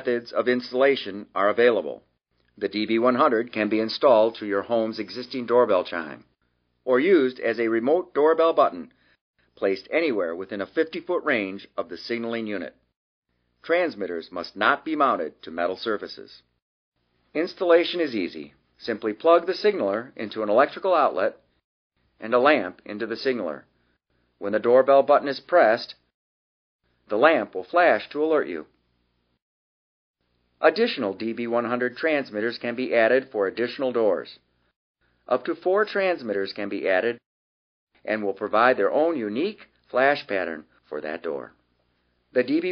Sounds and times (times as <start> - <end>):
Speech: 0.0 - 8.9, 9.6 - 12.8, 13.6 - 16.5, 17.3 - 21.5, 22.2 - 23.7, 24.4 - 26.1, 27.1 - 28.8, 30.6 - 34.4, 35.3 - 37.2, 38.0 - 41.6, 42.3 - 42.7.